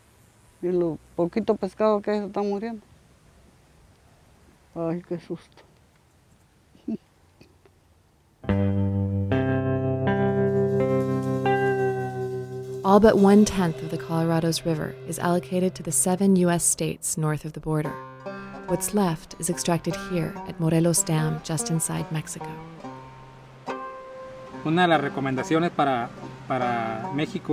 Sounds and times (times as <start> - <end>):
Outside, rural or natural: 0.0 - 8.6, 9.4 - 27.5
Speech: 0.6 - 2.8, 4.8 - 5.6, 12.9 - 17.9, 18.7 - 22.6, 24.7 - 27.5
Effects unit: 8.4 - 15.7, 17.8 - 18.7, 22.0 - 27.5
Music: 8.5 - 27.5.